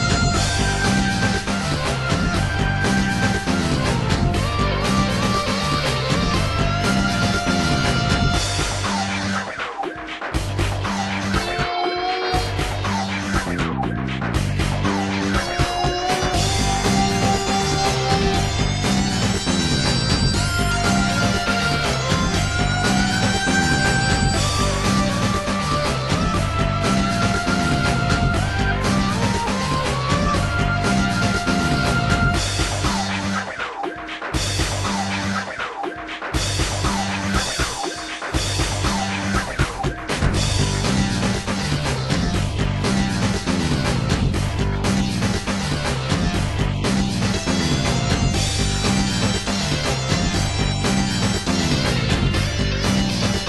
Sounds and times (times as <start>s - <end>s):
Soundtrack music: 0.0s - 53.4s.